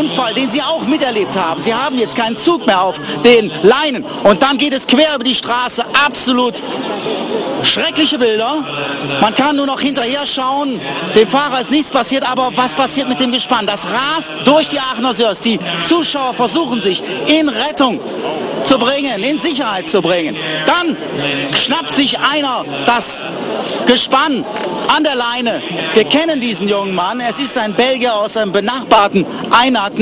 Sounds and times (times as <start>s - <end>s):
Speech: 0.0s - 30.0s.